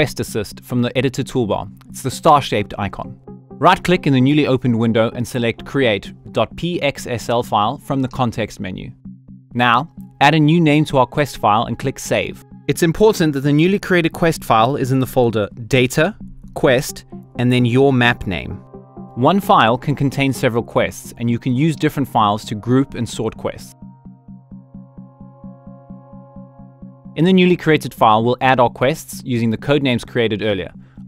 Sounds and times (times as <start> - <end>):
Speech: 0.0 - 9.0, 9.6 - 18.6, 19.2 - 23.8, 27.2 - 30.8
Music: 0.0 - 31.0.